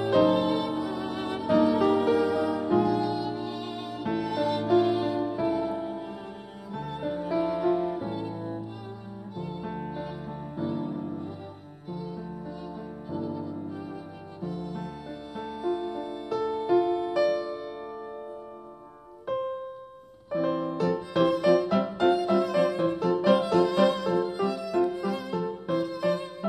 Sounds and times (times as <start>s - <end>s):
Violin, fiddle: 0.0s - 19.2s, 20.3s - 26.4s.